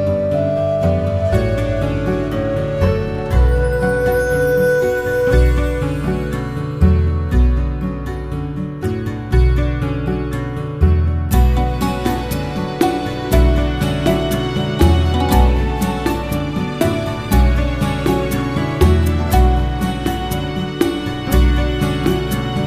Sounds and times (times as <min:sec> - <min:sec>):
Music: 0:00.0 - 0:22.6.